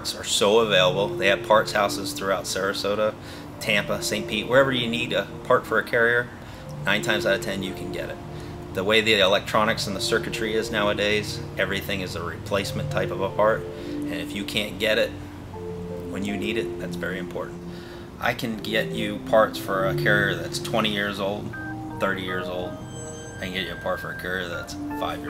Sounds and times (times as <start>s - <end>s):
Speech: 0.0s - 8.2s, 8.8s - 15.1s, 16.1s - 17.5s, 18.2s - 22.8s, 23.4s - 25.2s
Music: 0.0s - 25.2s.